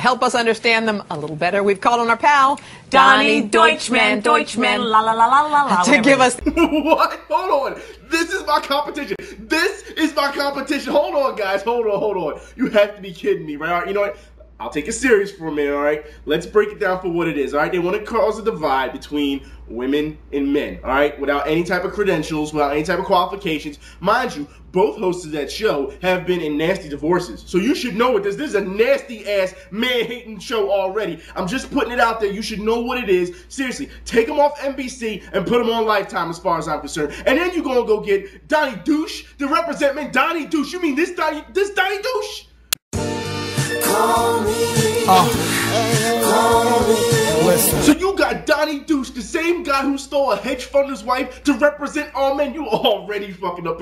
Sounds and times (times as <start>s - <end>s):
Speech: 0.0s - 6.4s, 7.0s - 42.5s, 45.1s - 45.4s, 47.3s - 53.8s.